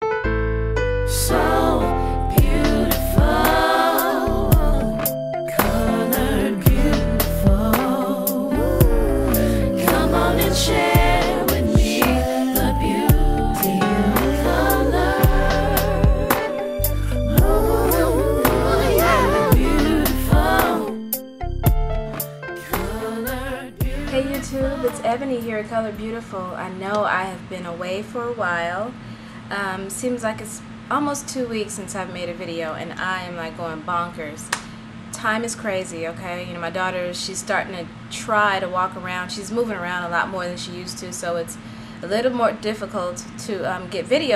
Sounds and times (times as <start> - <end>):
Speech: 23.9 - 44.3.